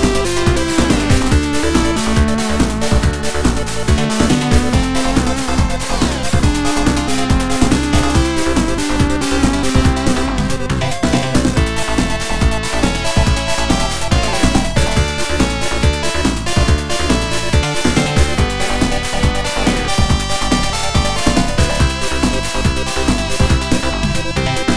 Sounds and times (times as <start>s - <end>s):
Music: 0.0s - 24.7s.